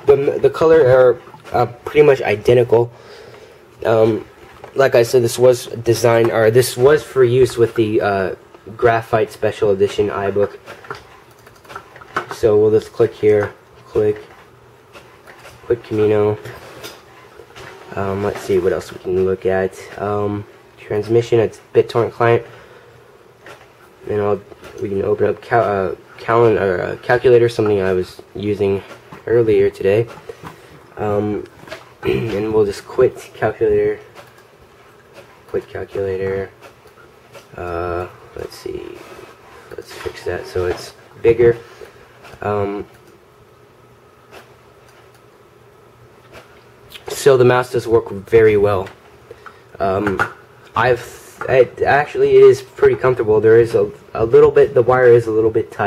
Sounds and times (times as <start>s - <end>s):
Speech: 0.0s - 3.0s, 3.8s - 10.7s, 12.2s - 14.4s, 15.6s - 16.6s, 17.9s - 22.5s, 24.0s - 30.2s, 31.0s - 34.1s, 35.5s - 36.6s, 37.5s - 41.7s, 42.3s - 42.9s, 46.9s - 49.0s, 49.8s - 55.8s
Inside, small room: 0.0s - 55.8s.